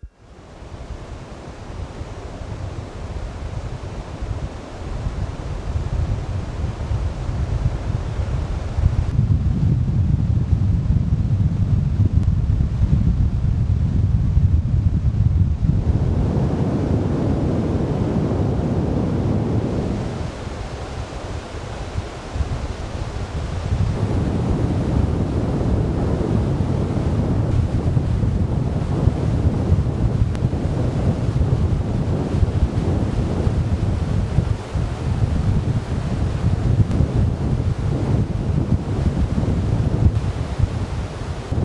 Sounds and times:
Wind noise (microphone): 0.0s - 41.6s.

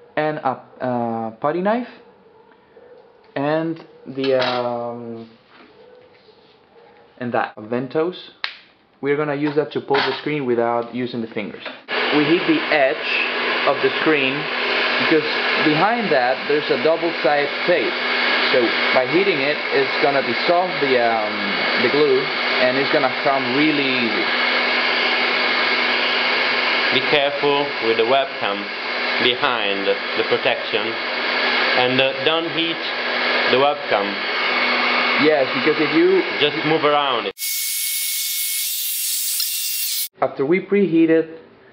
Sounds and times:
Hair dryer: 11.9s - 32.0s, 32.8s - 40.1s.

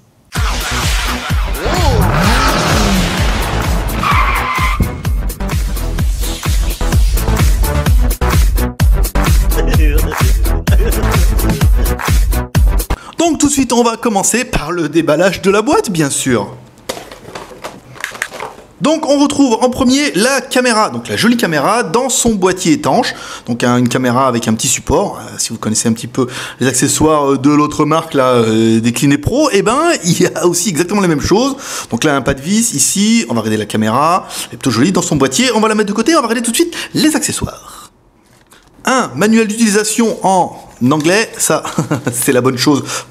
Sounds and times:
Music: 0.3s - 13.0s
Speech: 9.5s - 10.4s, 13.2s - 16.6s, 18.8s - 37.9s, 38.8s - 43.0s.

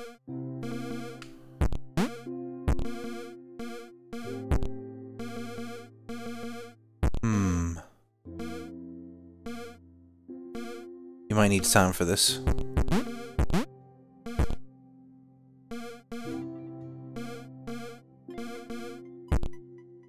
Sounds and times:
Synthesizer: 0.0s - 20.0s.

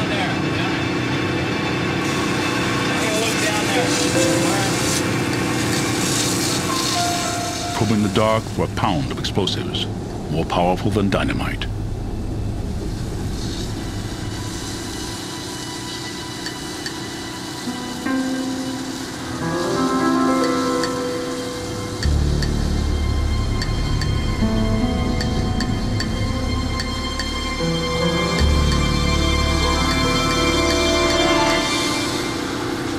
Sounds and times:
Music: 0.0s - 8.6s, 13.6s - 32.9s.

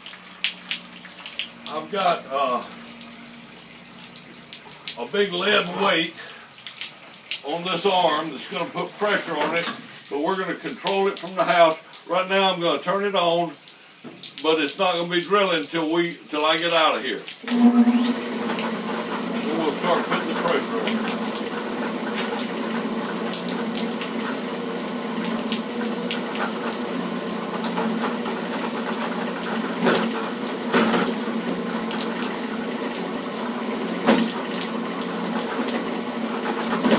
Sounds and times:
Speech: 1.7s - 2.7s, 5.0s - 6.3s, 7.4s - 13.6s, 14.4s - 17.3s, 19.4s - 21.0s.

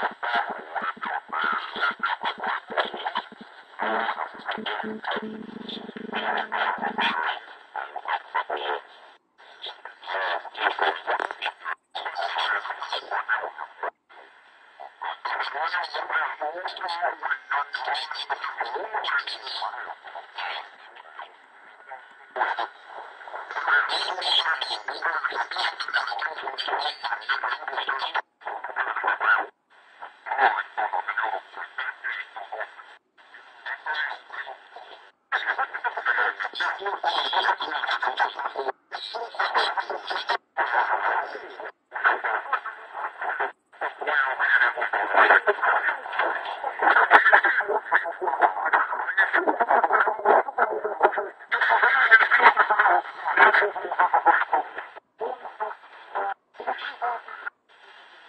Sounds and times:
Speech: 0.0s - 58.0s
Radio: 0.0s - 58.2s.

